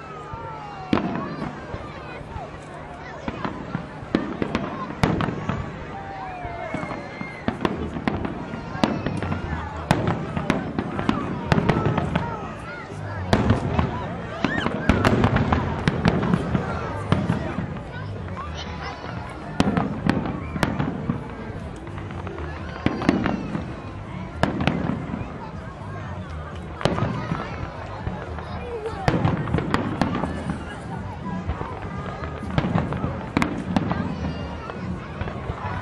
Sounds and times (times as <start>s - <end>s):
Speech: 0.0s - 35.8s.